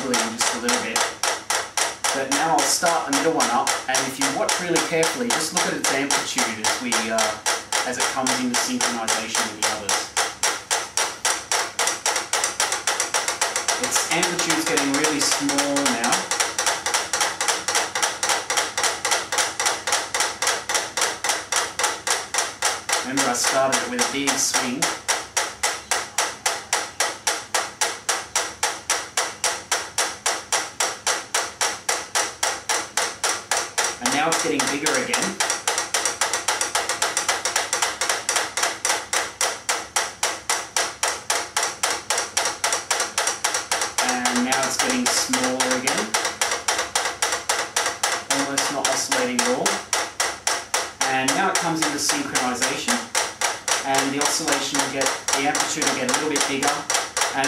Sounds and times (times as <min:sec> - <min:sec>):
Speech: 0:00.0 - 0:01.0, 0:02.1 - 0:10.1, 0:13.8 - 0:16.3, 0:23.0 - 0:25.0, 0:34.0 - 0:35.4, 0:44.0 - 0:46.2, 0:48.3 - 0:49.8, 0:51.0 - 0:53.1, 0:53.8 - 0:57.4
Inside, small room: 0:00.0 - 0:57.4.